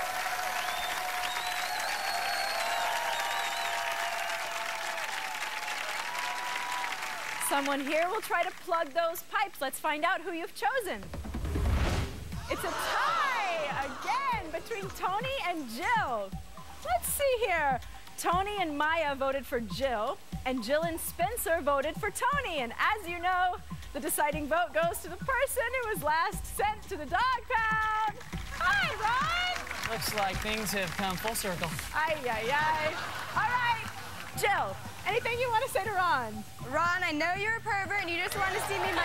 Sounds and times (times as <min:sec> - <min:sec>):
Music: 0:00.0 - 0:39.0.